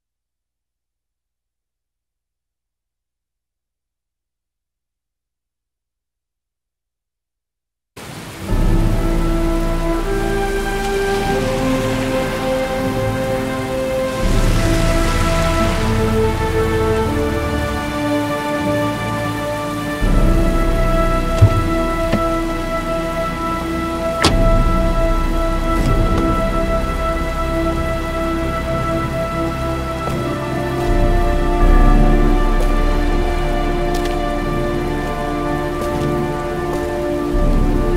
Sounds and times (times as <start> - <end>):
Rain on surface: 8.0 - 37.9.